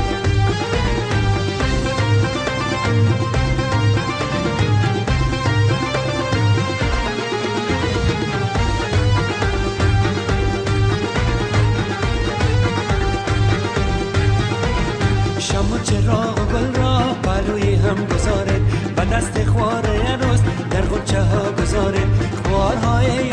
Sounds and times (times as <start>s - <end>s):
Wedding music: 0.0s - 23.3s.